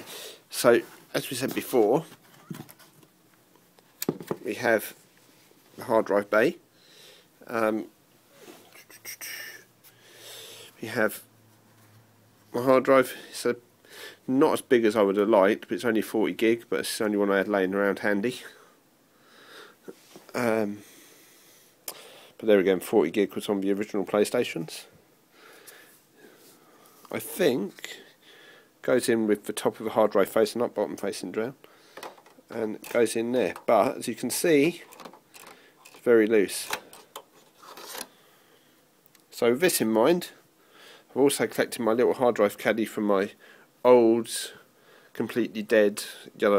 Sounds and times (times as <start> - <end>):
Inside, small room: 0.0 - 46.5
Speech: 0.5 - 2.1, 4.4 - 5.0, 5.8 - 6.6, 7.4 - 7.9, 10.8 - 11.3, 12.5 - 13.6, 14.3 - 18.6, 20.3 - 20.8, 22.4 - 25.0, 27.1 - 28.1, 28.8 - 31.6, 32.5 - 34.9, 36.0 - 36.8, 39.3 - 40.4, 41.1 - 44.6, 45.2 - 46.5.